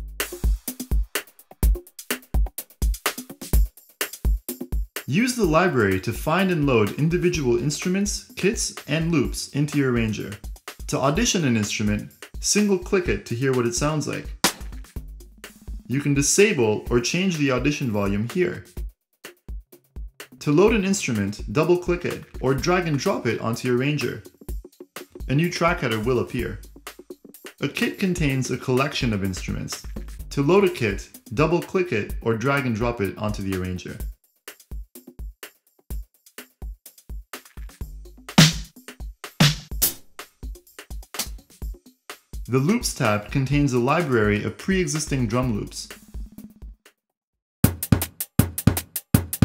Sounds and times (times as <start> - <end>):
Music: 0.0 - 49.4
Speech: 5.1 - 14.4, 15.9 - 18.7, 20.4 - 24.3, 25.3 - 26.6, 27.6 - 34.1, 42.5 - 46.0.